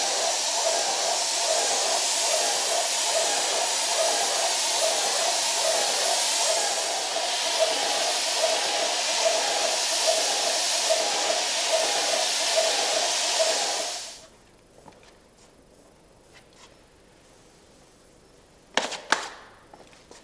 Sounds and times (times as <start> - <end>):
Spray: 0.0 - 14.3.